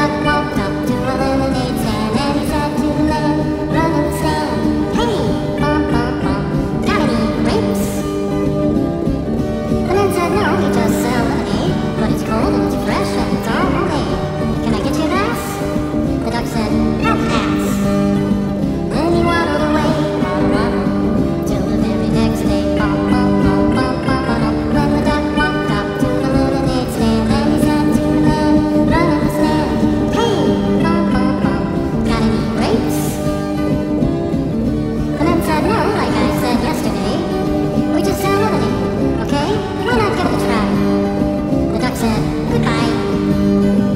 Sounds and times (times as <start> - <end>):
Music: 0.0 - 43.9.